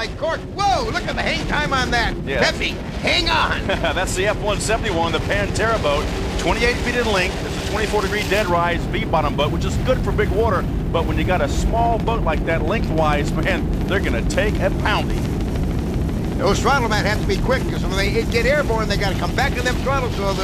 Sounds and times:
Speech: 0.0 - 15.2, 16.4 - 20.4.

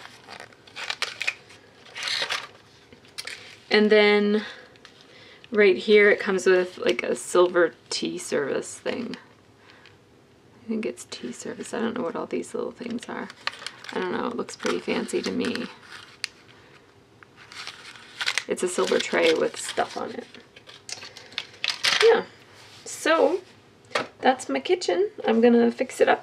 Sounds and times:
Inside, small room: 0.0 - 26.2
Speech: 3.7 - 4.6, 5.6 - 9.2, 10.6 - 13.3, 13.9 - 15.8, 18.5 - 20.3, 22.0 - 22.3, 22.9 - 23.4, 24.2 - 26.2.

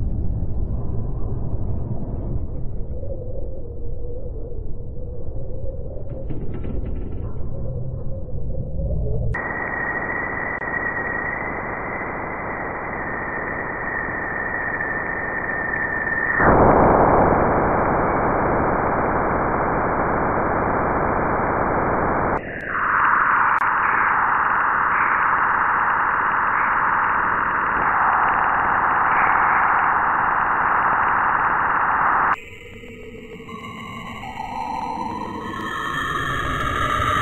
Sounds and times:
Sound effect: 0.0 - 37.2.

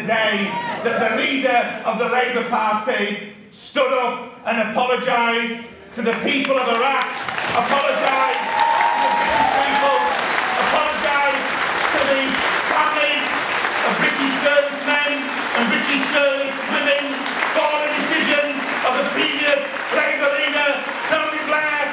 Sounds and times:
Narration, monologue: 0.0 - 8.5, 9.5 - 21.9
Male speech, man speaking: 0.0 - 21.9.

